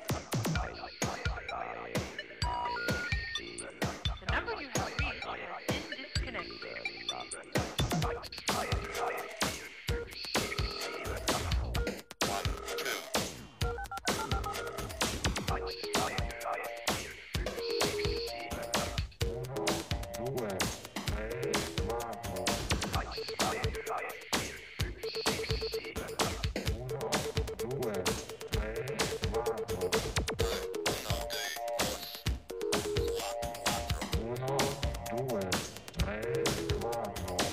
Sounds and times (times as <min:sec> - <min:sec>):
Music: 0:00.0 - 0:37.5
Ringtone: 0:00.8 - 0:04.2, 0:10.0 - 0:19.4, 0:24.9 - 0:26.2, 0:28.4 - 0:34.2.